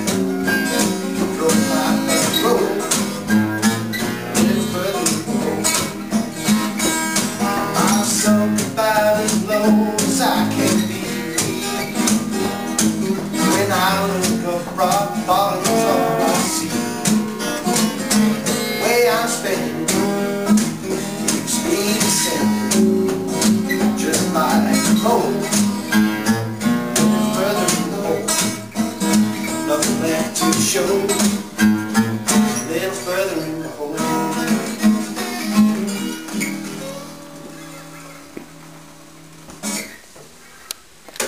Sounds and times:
Acoustic guitar: 0.0s - 41.2s.

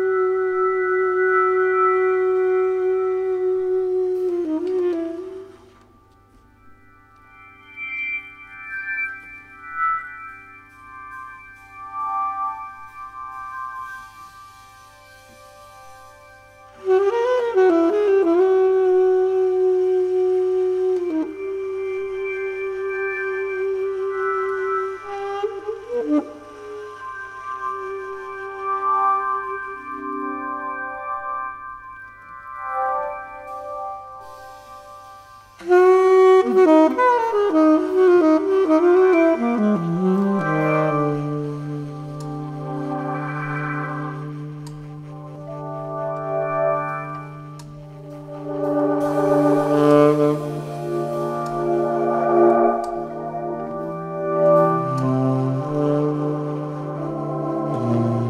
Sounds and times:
Inside, large room or hall: 0.0s - 9.6s, 10.2s - 30.8s, 31.5s - 58.3s
Music: 0.0s - 58.3s.

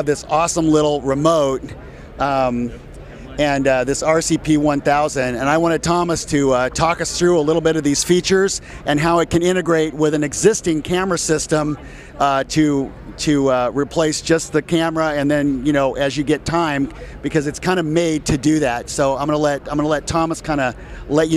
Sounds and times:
Speech: 0.0s - 21.3s.

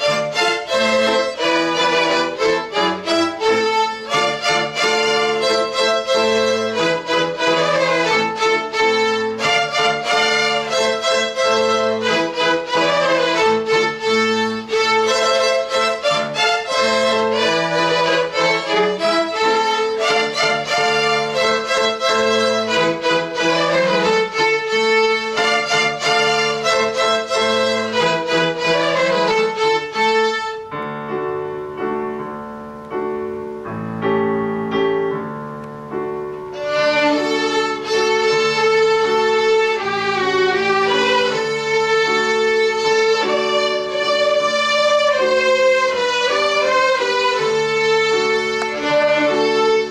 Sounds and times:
Violin, fiddle: 0.0s - 30.8s, 36.4s - 49.9s.

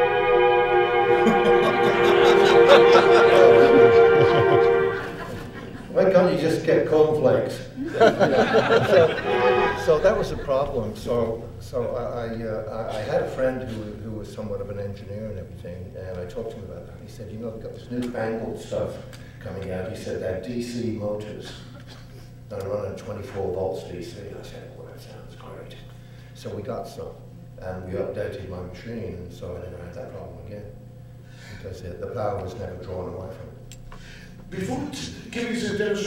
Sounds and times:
Chuckle, chortle: 1.1s - 6.0s, 7.8s - 9.8s
Speech: 5.9s - 8.2s, 8.8s - 21.8s, 22.5s - 30.8s, 31.6s - 33.6s, 34.5s - 36.0s.

